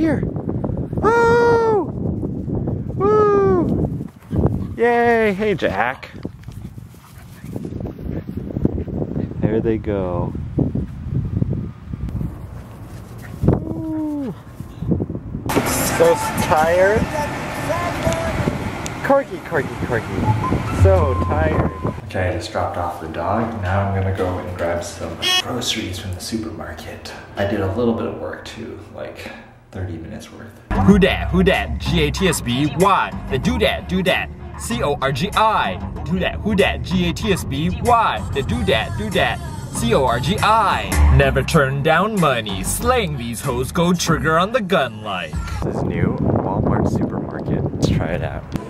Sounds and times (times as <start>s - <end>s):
Wind: 0.0s - 48.7s.